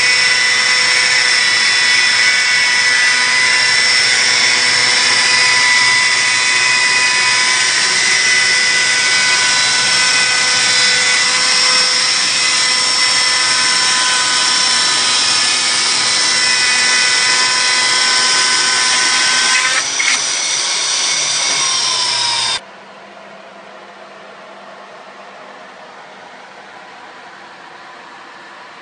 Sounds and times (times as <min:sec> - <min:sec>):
Wood: 0:00.0 - 0:22.6.